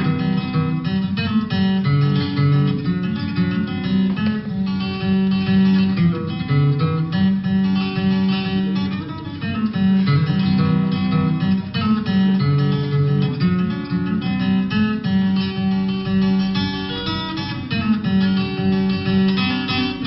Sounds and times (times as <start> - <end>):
Music: 0.0 - 20.0.